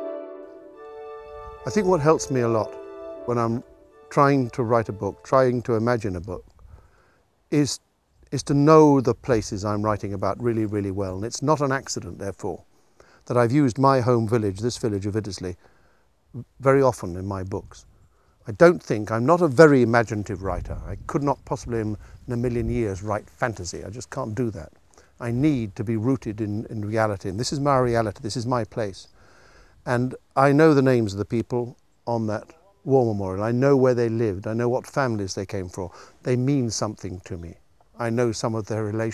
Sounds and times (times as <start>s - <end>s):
Speech: 1.7s - 6.4s, 7.5s - 12.6s, 13.3s - 15.6s, 16.4s - 17.8s, 18.4s - 29.1s, 29.9s - 39.1s.